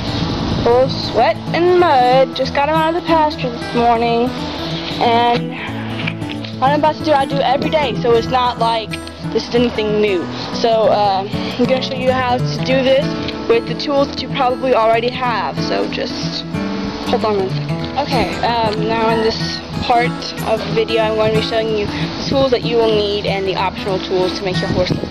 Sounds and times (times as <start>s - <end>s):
Music: 0.0s - 25.1s
Speech: 0.6s - 4.3s, 5.0s - 5.7s, 6.6s - 16.4s, 17.1s - 25.1s.